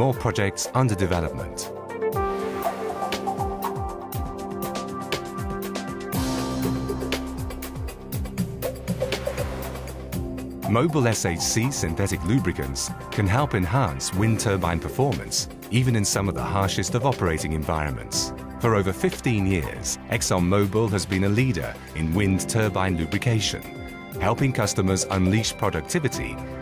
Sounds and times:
Speech: 0.0s - 1.7s, 10.7s - 26.4s
Music: 0.0s - 26.6s.

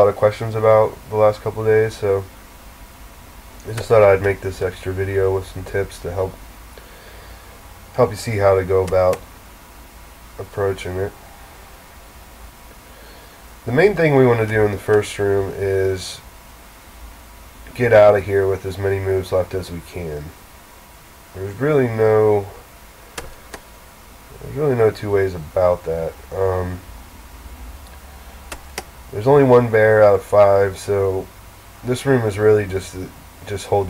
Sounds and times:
Speech: 0.0s - 2.3s, 3.6s - 6.4s, 8.0s - 9.2s, 10.4s - 11.2s, 13.7s - 16.3s, 17.7s - 20.4s, 21.4s - 22.6s, 24.3s - 26.9s, 29.1s - 33.8s.

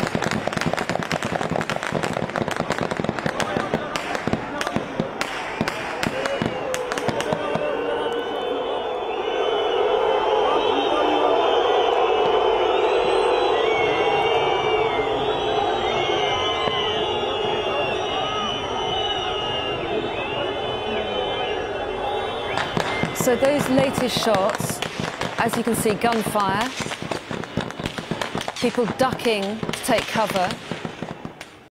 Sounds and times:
Gunshot, gunfire: 26.1s - 31.6s.

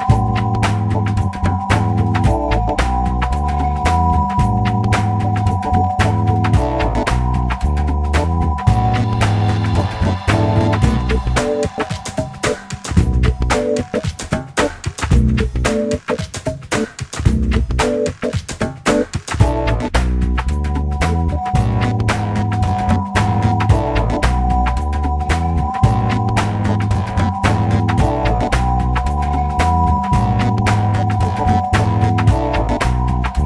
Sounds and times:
Music: 0.0s - 33.4s.

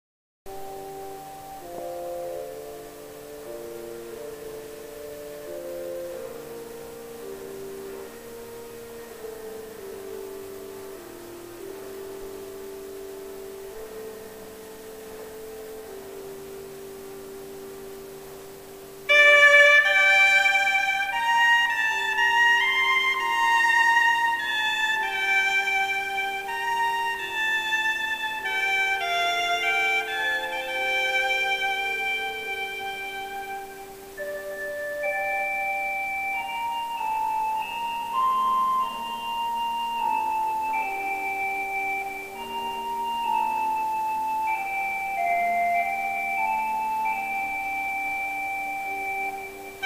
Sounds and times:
Glockenspiel: 0.5s - 49.8s.

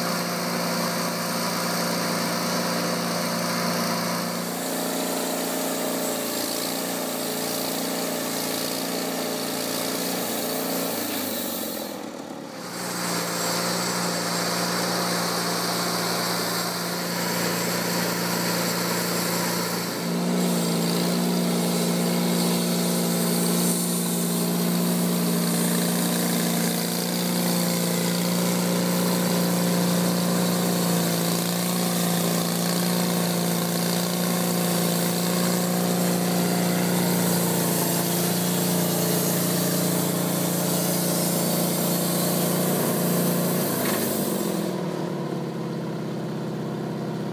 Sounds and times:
Wood: 0.0s - 44.7s
Sawing: 0.0s - 46.1s.

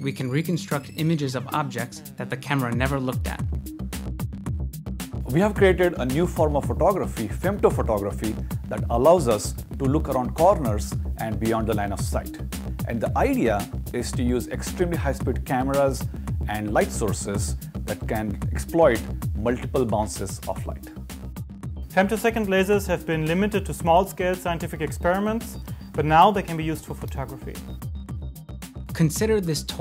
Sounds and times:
Speech: 0.0s - 3.5s, 5.3s - 21.0s, 22.0s - 27.6s, 28.9s - 29.8s
Music: 0.0s - 29.8s.

